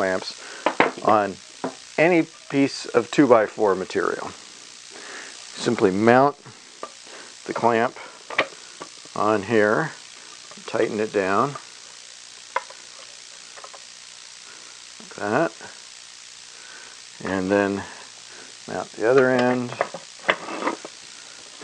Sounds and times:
Speech: 0.0s - 0.3s, 1.0s - 1.4s, 2.0s - 4.4s, 5.6s - 6.4s, 7.5s - 7.9s, 9.2s - 10.0s, 10.6s - 11.6s, 15.0s - 15.7s, 17.2s - 17.9s, 18.7s - 19.8s.

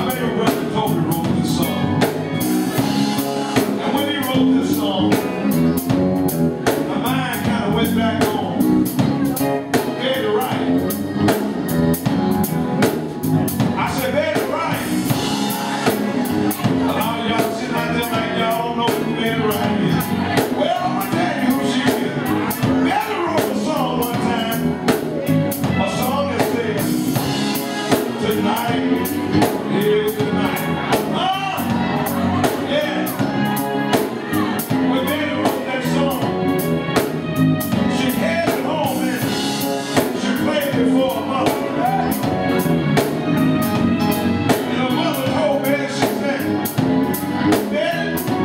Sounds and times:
Male singing: 0.0s - 2.1s, 3.6s - 5.5s, 6.7s - 8.6s, 9.3s - 10.8s, 13.8s - 15.2s, 16.6s - 27.2s, 27.9s - 33.2s, 33.9s - 36.3s, 37.8s - 42.3s, 44.5s - 46.7s, 47.5s - 48.4s
Music: 0.0s - 48.4s.

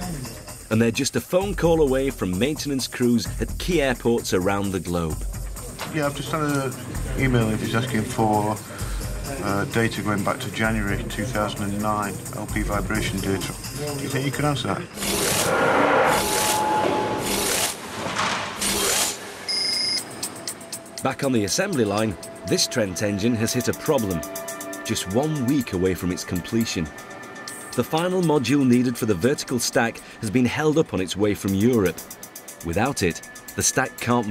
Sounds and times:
Speech: 0.0s - 5.2s, 5.9s - 8.6s, 9.3s - 14.9s, 21.0s - 24.2s, 24.9s - 26.9s, 27.8s - 32.0s, 32.6s - 34.3s
Music: 0.0s - 15.6s, 19.8s - 34.3s.

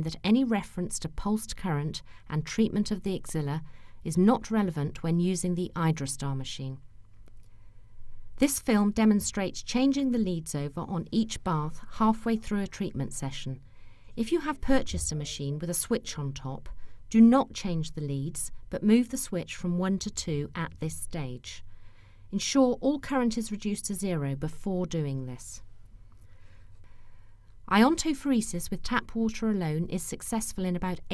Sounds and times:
Speech: 0.0s - 6.8s, 8.4s - 13.6s, 14.2s - 21.6s, 22.3s - 25.6s, 27.7s - 31.1s.

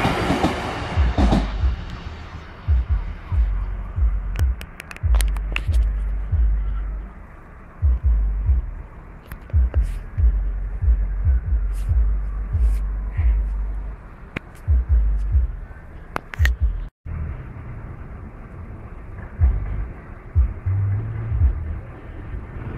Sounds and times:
Throbbing: 0.0s - 7.2s, 7.8s - 14.0s, 14.7s - 15.8s, 19.2s - 22.0s
Hum: 0.8s - 22.3s.

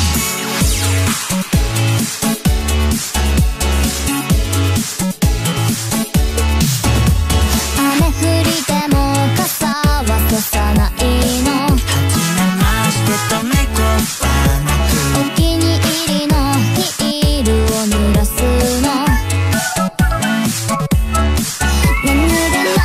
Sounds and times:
Music: 0.0s - 22.8s.

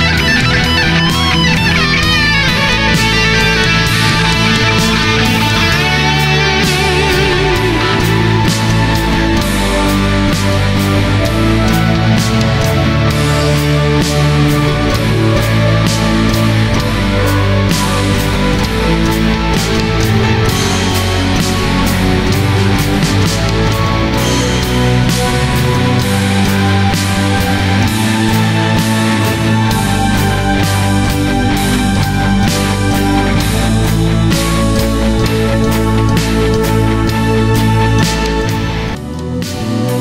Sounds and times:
Progressive rock: 0.0s - 40.0s.

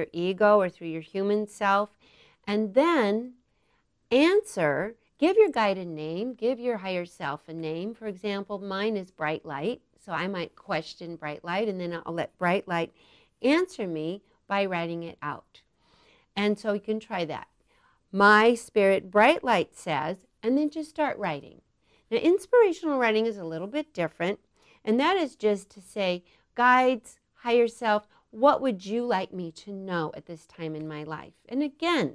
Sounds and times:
Speech: 0.0s - 1.9s, 2.5s - 3.4s, 4.1s - 15.6s, 16.4s - 17.5s, 18.2s - 32.1s.

